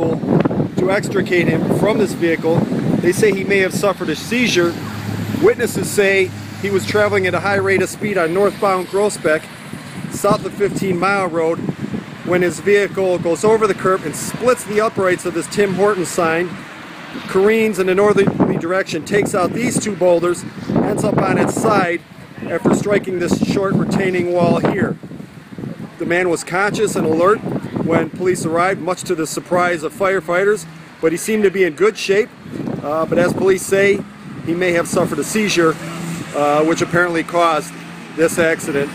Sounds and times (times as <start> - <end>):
Speech: 0.8 - 4.8, 5.4 - 9.5, 10.2 - 11.6, 12.3 - 16.6, 17.3 - 25.0, 26.0 - 38.9.